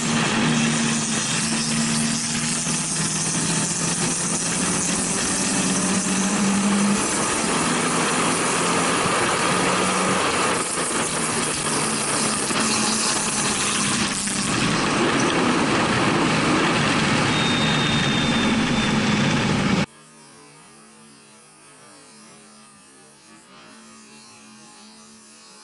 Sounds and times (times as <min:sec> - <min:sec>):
Race car, auto racing: 0:00.0 - 0:19.9
Engine: 0:00.0 - 0:25.6
Outside, rural or natural: 0:00.0 - 0:25.6.